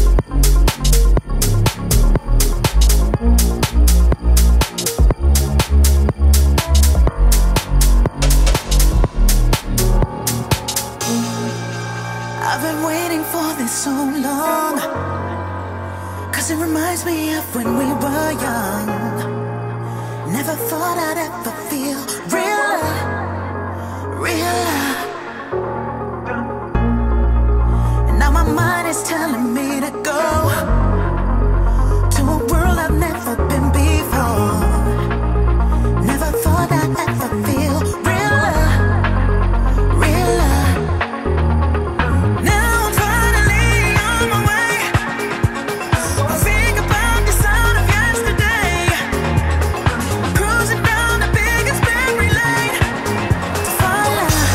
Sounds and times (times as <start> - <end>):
Music: 0.0 - 54.5.